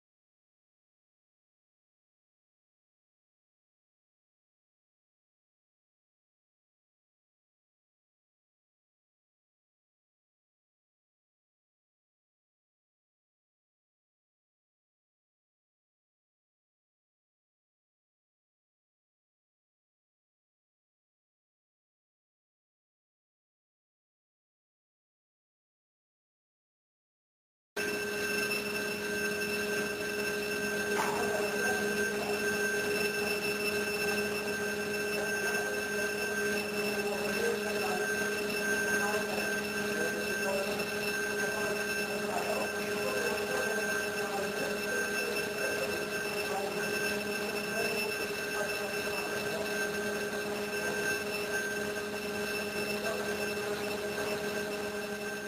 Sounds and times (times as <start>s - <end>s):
Speech: 31.0s - 33.4s, 35.1s - 51.3s, 52.9s - 53.8s.